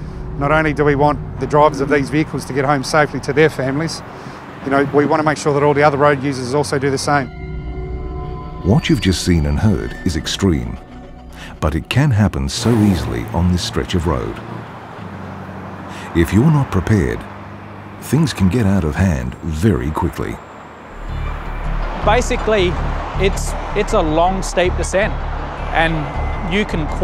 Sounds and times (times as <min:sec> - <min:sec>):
Truck: 0:00.0 - 0:07.2, 0:10.5 - 0:27.0
Car: 0:00.0 - 0:07.3, 0:08.6 - 0:27.0
Speech: 0:00.4 - 0:04.0, 0:04.6 - 0:07.3, 0:08.6 - 0:10.8, 0:11.6 - 0:14.4, 0:16.1 - 0:17.2, 0:18.0 - 0:20.4, 0:22.0 - 0:27.0
Music: 0:06.3 - 0:12.6, 0:21.0 - 0:27.0.